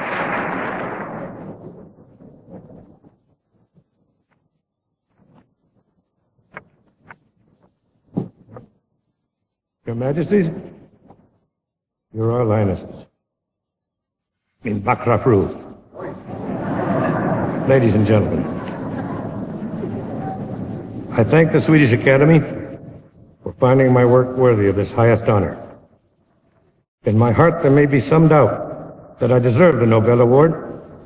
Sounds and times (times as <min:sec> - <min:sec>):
Narration, monologue: 0:09.6 - 0:13.4, 0:14.2 - 0:15.9, 0:21.1 - 0:26.2, 0:27.0 - 0:31.0
Male speech, man speaking: 0:09.9 - 0:10.7, 0:12.2 - 0:13.1, 0:14.7 - 0:15.7, 0:17.7 - 0:18.4, 0:21.1 - 0:22.6, 0:23.5 - 0:25.6, 0:27.0 - 0:30.7.